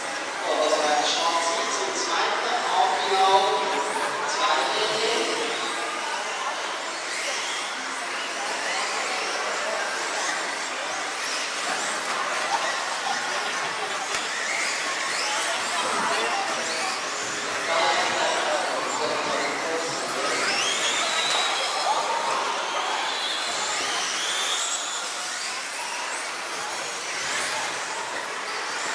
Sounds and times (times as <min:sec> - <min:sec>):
Speech: 0:00.3 - 0:11.2, 0:11.8 - 0:25.8.